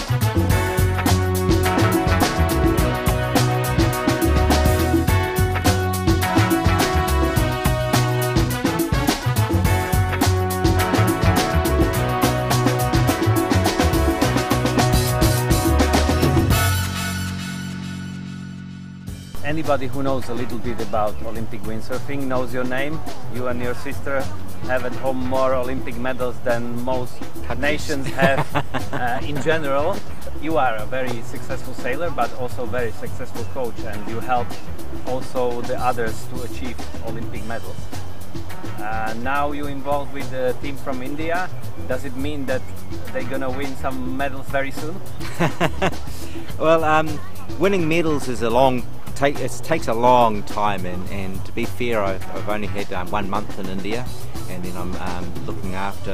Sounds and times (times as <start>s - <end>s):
Speech: 19.4s - 28.3s, 29.0s - 37.8s, 38.8s - 45.0s, 46.6s - 56.1s.